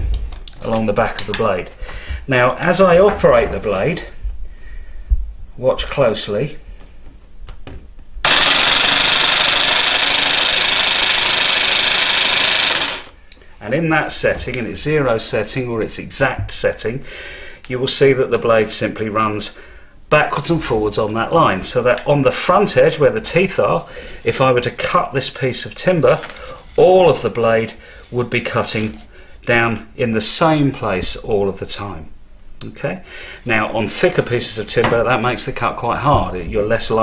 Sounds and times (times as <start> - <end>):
Power tool: 8.2 - 13.2.